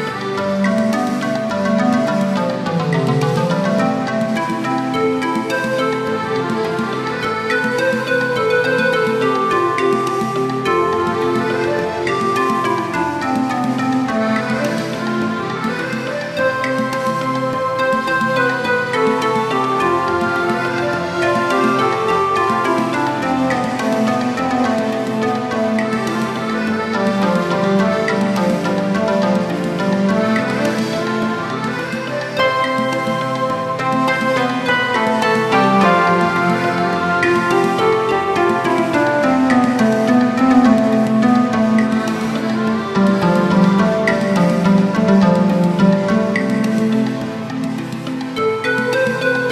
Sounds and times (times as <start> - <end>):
Music: 0.0 - 49.5.